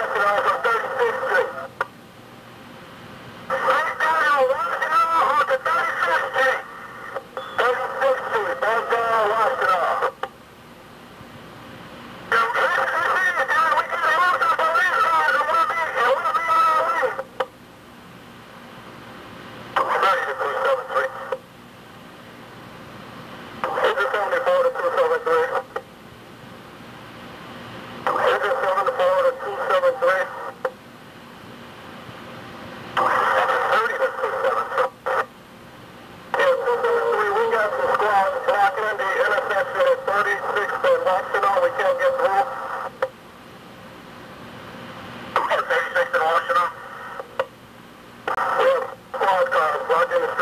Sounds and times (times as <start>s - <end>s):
Speech: 0.0s - 1.7s, 3.5s - 6.7s, 7.6s - 10.2s, 12.3s - 17.3s, 19.8s - 21.4s, 23.6s - 25.8s, 28.1s - 30.7s, 33.0s - 35.3s, 36.4s - 43.1s, 45.4s - 46.8s, 48.4s - 50.4s
Fire: 19.3s - 50.4s.